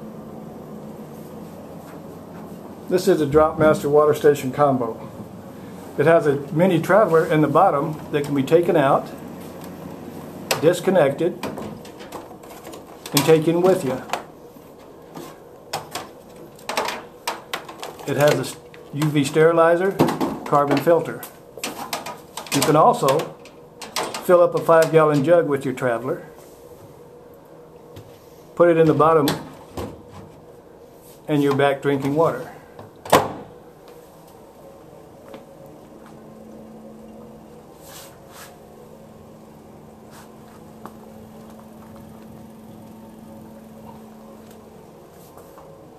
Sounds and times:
Speech: 0:02.9 - 0:05.1, 0:06.0 - 0:09.2, 0:10.5 - 0:11.5, 0:13.1 - 0:14.2, 0:18.0 - 0:21.4, 0:22.5 - 0:23.4, 0:24.2 - 0:26.4, 0:28.6 - 0:29.5, 0:31.3 - 0:32.7.

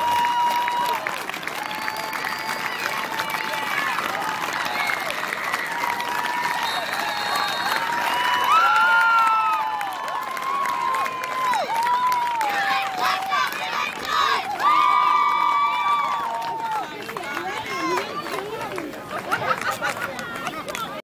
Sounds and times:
Speech: 0:16.2 - 0:21.0.

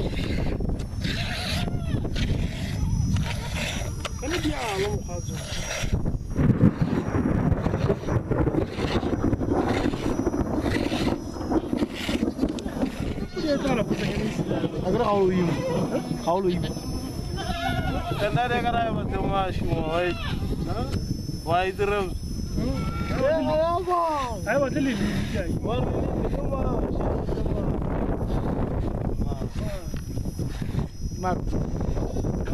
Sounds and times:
Bleat: 0:17.4 - 0:18.4, 0:20.0 - 0:20.5, 0:22.6 - 0:23.2.

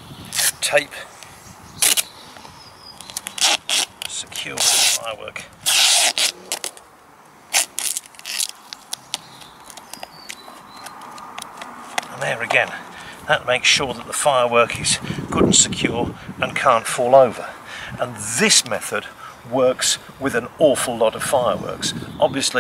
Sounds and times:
Speech: 0:00.6 - 0:01.1, 0:04.1 - 0:05.5, 0:12.1 - 0:22.6
Crackle: 0:03.0 - 0:05.0, 0:07.5 - 0:11.7.

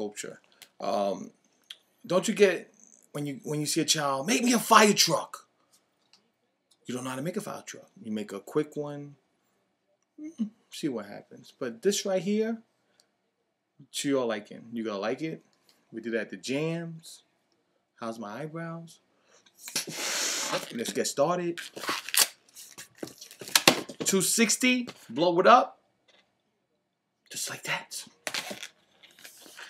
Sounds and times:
Speech: 0:00.0 - 0:01.4, 0:02.1 - 0:05.5, 0:06.2 - 0:09.2, 0:10.3 - 0:12.7, 0:13.8 - 0:17.3, 0:18.0 - 0:19.0, 0:20.7 - 0:21.6, 0:24.1 - 0:25.8.

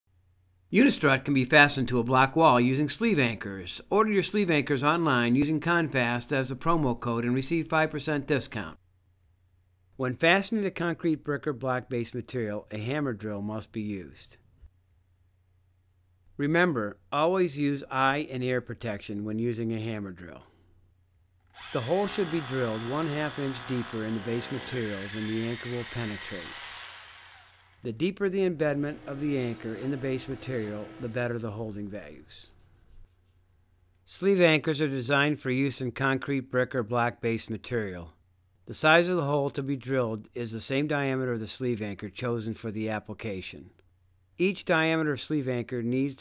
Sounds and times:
Speech: 0:00.7 - 0:08.8, 0:10.0 - 0:14.4, 0:16.4 - 0:20.5, 0:21.7 - 0:26.5, 0:27.8 - 0:32.5, 0:34.1 - 0:43.8, 0:44.4 - 0:46.2.

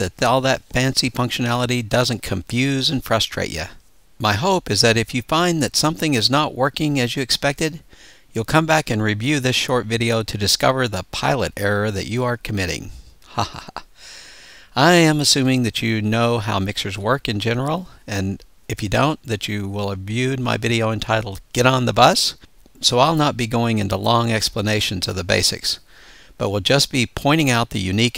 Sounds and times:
Speech: 0:00.0 - 0:07.8, 0:08.4 - 0:13.6, 0:14.8 - 0:25.8, 0:26.4 - 0:28.1.

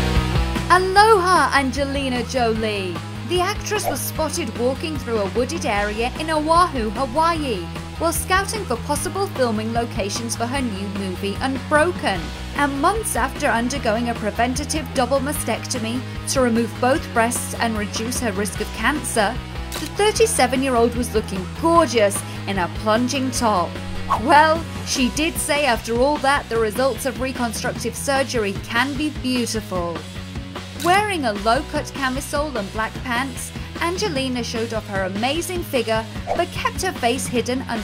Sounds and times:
Music: 0:00.0 - 0:37.8
Speech: 0:00.7 - 0:30.0, 0:30.8 - 0:37.8.

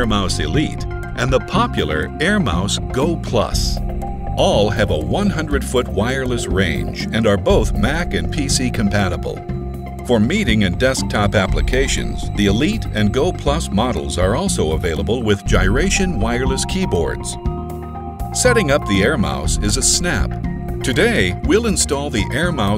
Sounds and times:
Speech: 0:00.0 - 0:03.8, 0:04.4 - 0:09.4, 0:10.1 - 0:17.4, 0:18.4 - 0:22.7
Music: 0:00.0 - 0:22.7.

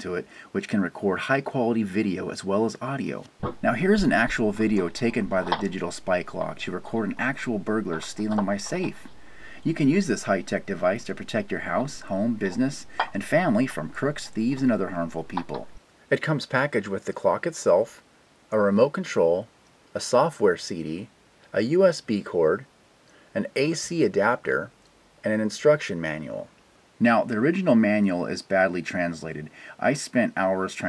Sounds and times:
Speech: 0:00.0 - 0:22.7, 0:23.4 - 0:30.8.

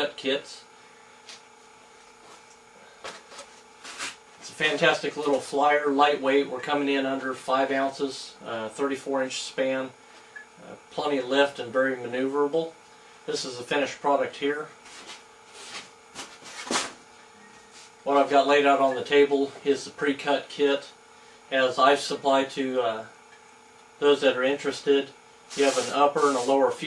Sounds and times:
Speech: 0:00.0 - 0:00.7, 0:04.4 - 0:10.0, 0:10.6 - 0:14.8, 0:18.0 - 0:23.1, 0:24.0 - 0:26.8.

